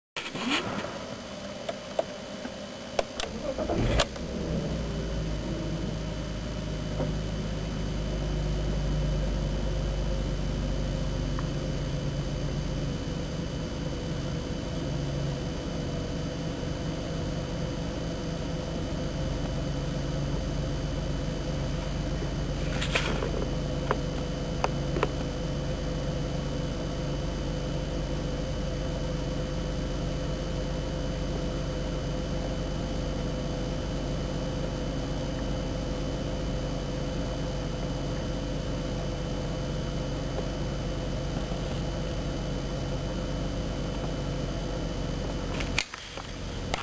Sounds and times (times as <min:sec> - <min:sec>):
Vehicle: 0:00.0 - 0:46.8.